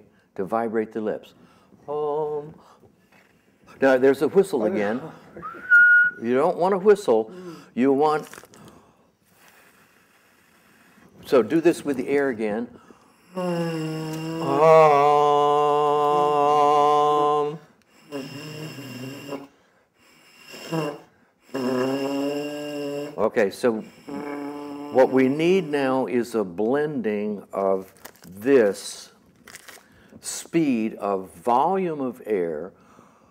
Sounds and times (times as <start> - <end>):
Inside, small room: 0.0 - 33.3.